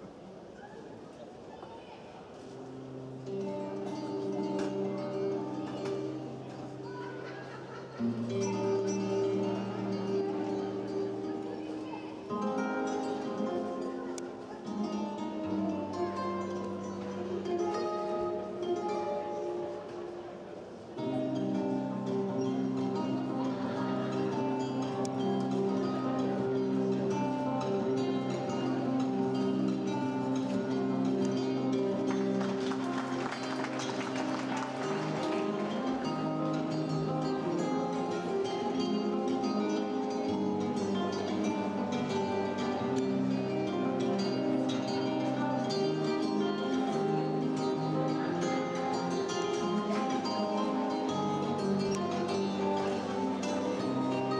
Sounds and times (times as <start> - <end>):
Music: 2.5 - 54.3.